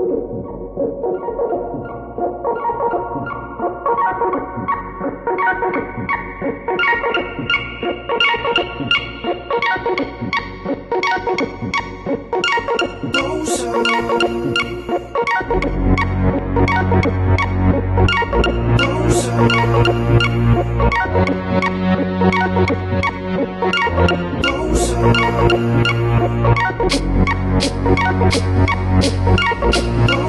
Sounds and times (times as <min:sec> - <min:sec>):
Electronic music: 0:00.0 - 0:30.2.